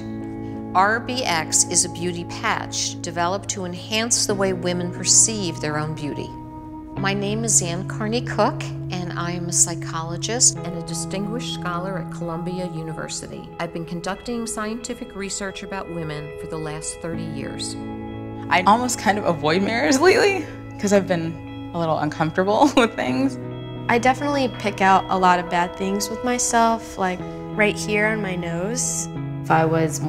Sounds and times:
Music: 0:00.0 - 0:30.0
Speech: 0:00.8 - 0:06.3, 0:07.0 - 0:17.8, 0:18.5 - 0:30.0.

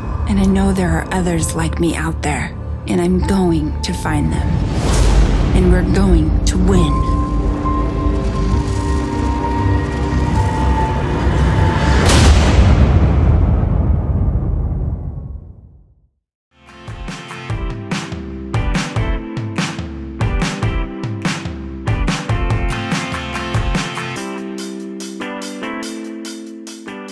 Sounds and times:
Music: 0:00.0 - 0:12.4, 0:16.5 - 0:27.1.

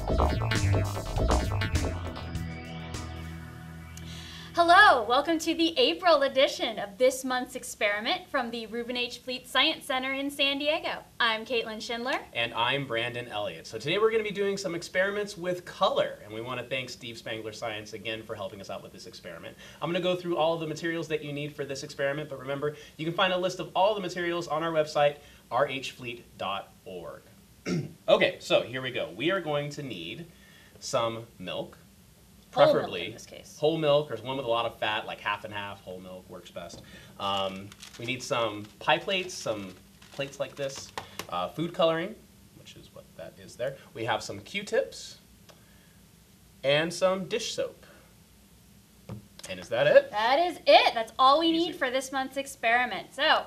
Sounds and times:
Speech: 0:32.6 - 0:45.2.

